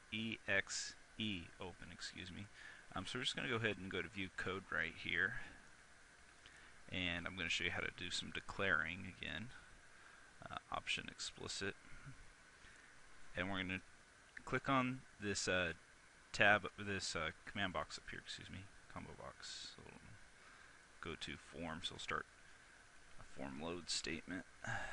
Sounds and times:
Speech: 0.1 - 5.6, 6.9 - 9.6, 10.4 - 11.8, 13.4 - 20.2, 21.0 - 22.3, 23.2 - 24.8.

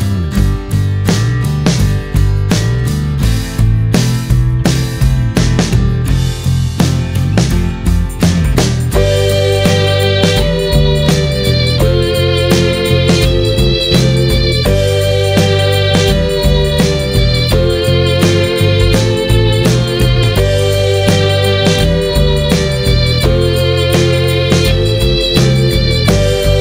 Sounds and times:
Music: 0.0 - 26.6.

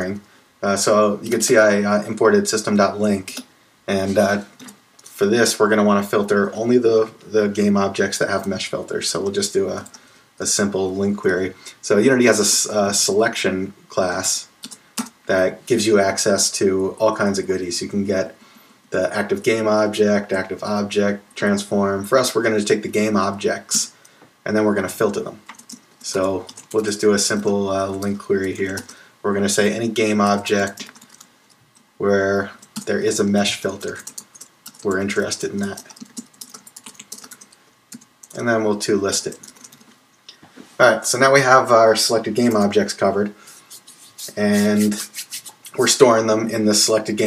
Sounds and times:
Speech: 0.0 - 31.0, 32.0 - 34.2, 34.8 - 36.0, 38.3 - 39.6, 40.8 - 47.2.

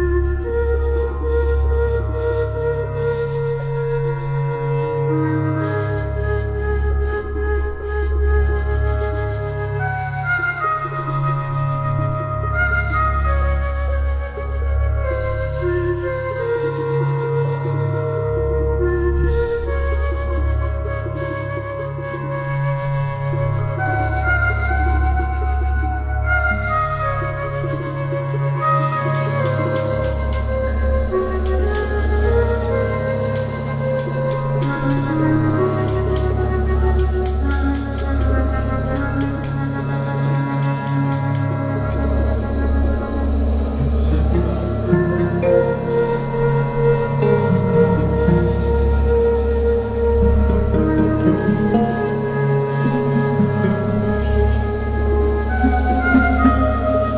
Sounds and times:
Music: 0.0 - 57.1.

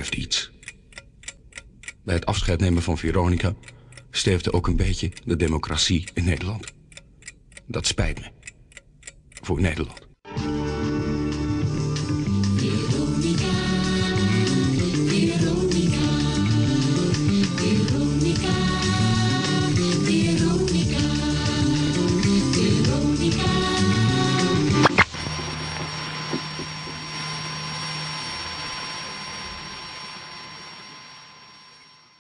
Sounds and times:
Music: 10.3 - 29.0.

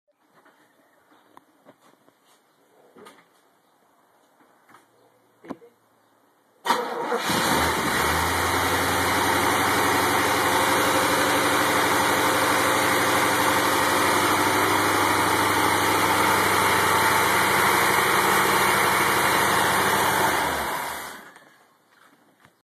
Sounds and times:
Medium engine (mid frequency): 6.7 - 21.5
Idling: 7.9 - 21.4.

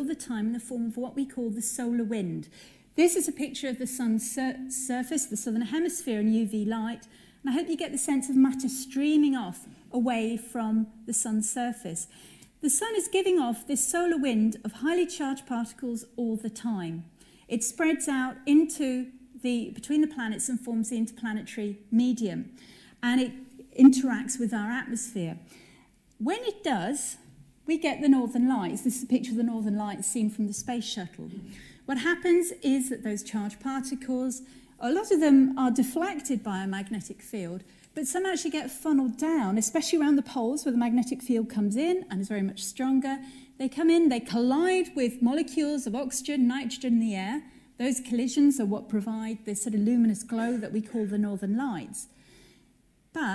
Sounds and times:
Speech: 0.0 - 25.5, 26.2 - 52.1, 53.1 - 53.3.

